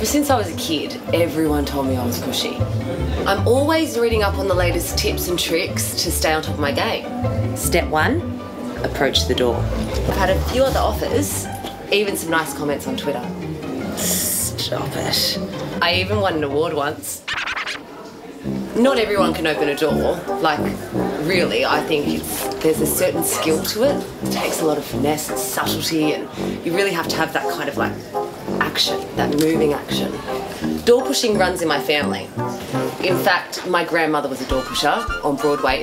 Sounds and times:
Speech: 0.0 - 2.6, 3.2 - 8.2, 8.8 - 13.3, 14.0 - 17.3, 18.0 - 32.3, 33.0 - 35.8
Music: 0.0 - 35.8.

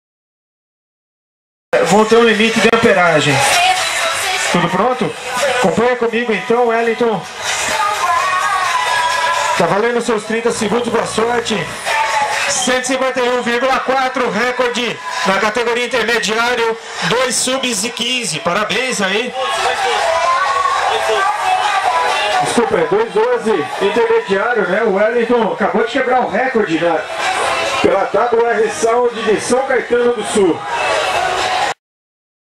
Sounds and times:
Speech: 1.8 - 3.5, 4.6 - 7.2, 9.6 - 11.7, 12.6 - 19.4, 22.4 - 27.0, 27.8 - 30.6
Hubbub, speech noise, speech babble: 1.8 - 31.8
Music: 1.8 - 31.8.

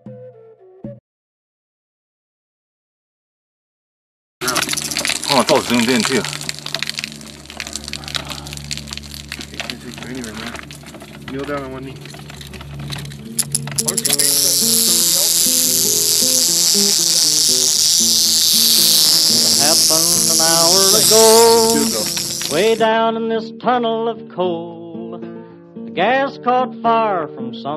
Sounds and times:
Music: 0.0 - 1.0, 4.4 - 27.7
Outside, rural or natural: 4.4 - 22.8
Speech: 5.3 - 6.4, 9.6 - 10.6, 11.3 - 12.0, 13.8 - 15.4, 19.3 - 23.0.

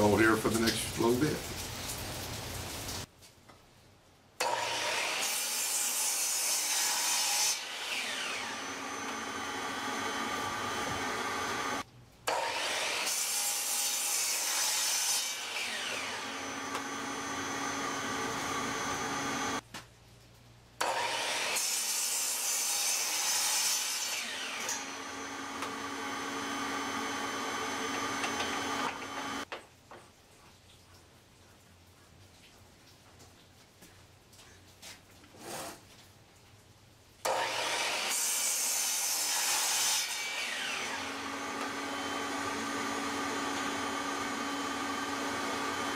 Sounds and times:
Sawing: 4.4 - 19.6, 20.8 - 29.5, 37.2 - 45.9
Wood: 4.4 - 19.6, 25.6 - 30.0.

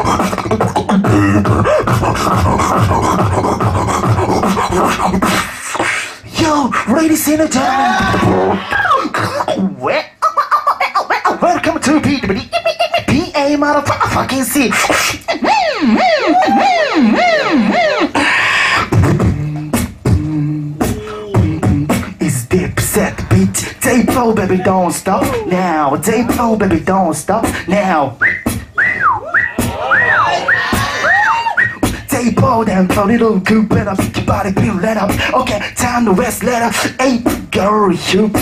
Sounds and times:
Beatboxing: 0.0 - 38.4.

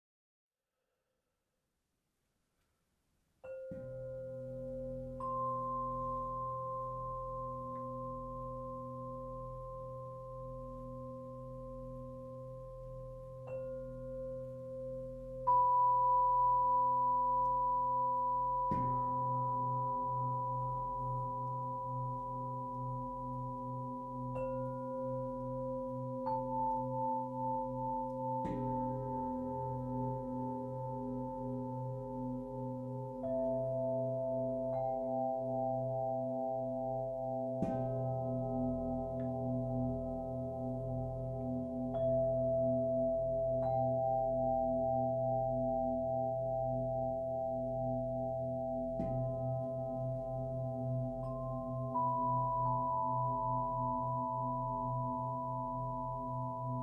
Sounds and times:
Music: 2.5 - 56.8.

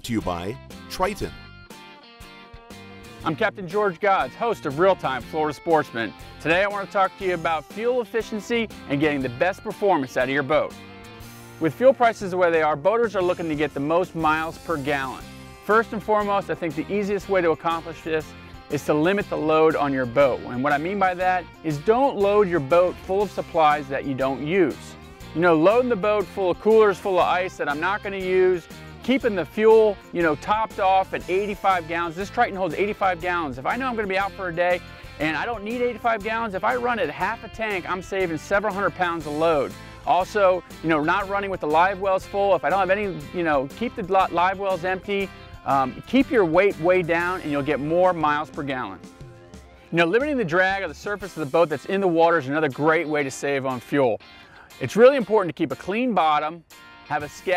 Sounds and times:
Speech: 0.0 - 1.4, 3.2 - 10.8, 11.6 - 49.0, 50.0 - 54.2, 54.8 - 57.5
Music: 0.0 - 57.5.

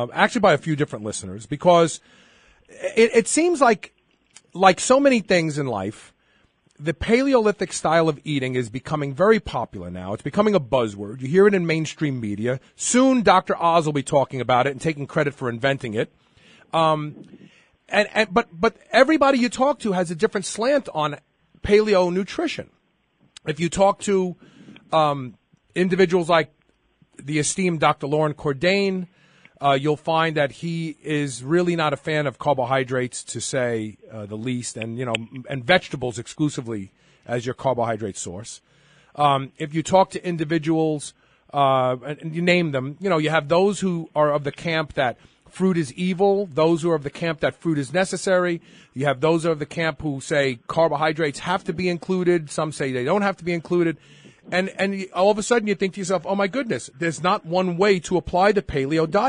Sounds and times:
Speech: 0.0 - 2.0, 2.7 - 6.2, 6.8 - 16.1, 16.7 - 22.7, 23.4 - 26.6, 27.2 - 38.6, 39.2 - 59.2.

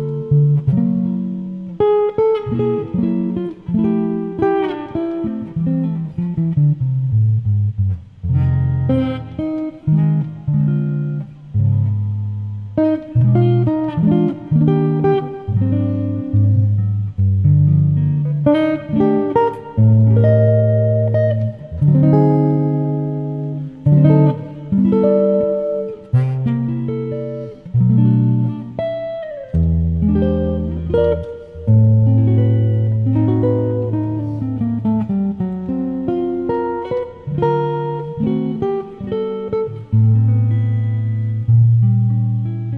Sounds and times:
Acoustic guitar: 0.0 - 42.7
Strum: 0.0 - 42.7.

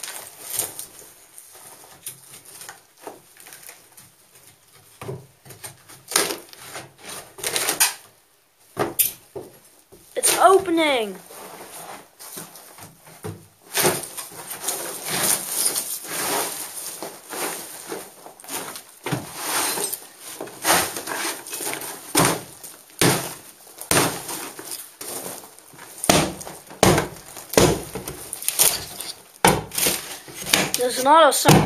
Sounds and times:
Speech: 10.2 - 11.2, 30.8 - 31.6.

